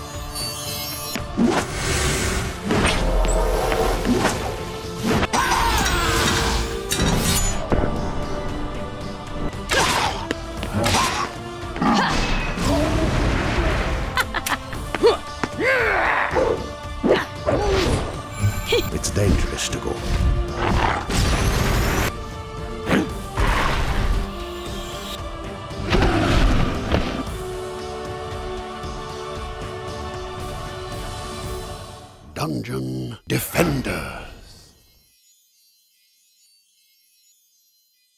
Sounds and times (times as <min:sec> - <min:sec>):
Music: 0:00.0 - 0:38.1
Speech: 0:18.7 - 0:20.0, 0:32.4 - 0:34.6.